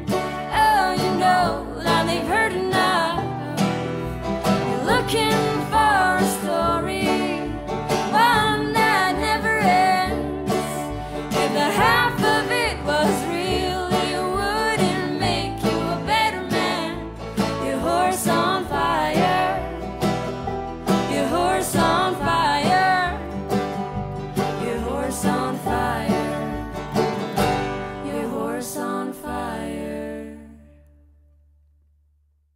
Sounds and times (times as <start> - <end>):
Bluegrass: 0.0 - 30.9.